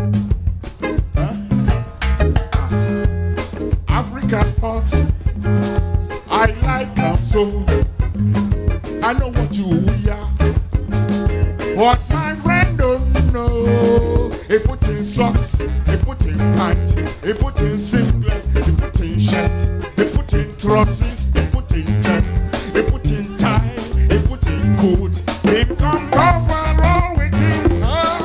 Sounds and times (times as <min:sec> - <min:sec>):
Afrobeat: 0:00.0 - 0:28.2.